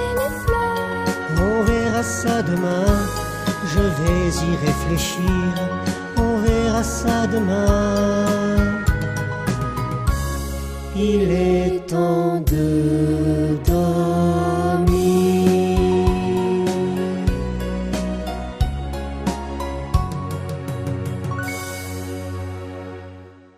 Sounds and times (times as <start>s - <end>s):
Music: 0.0s - 23.5s
Singing: 11.0s - 17.0s.